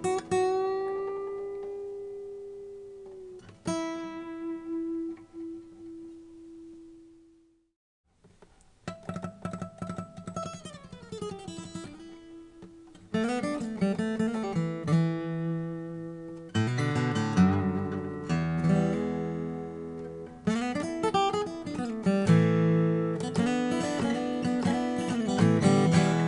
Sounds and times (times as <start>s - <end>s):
Acoustic guitar: 0.0s - 7.2s, 8.3s - 26.2s.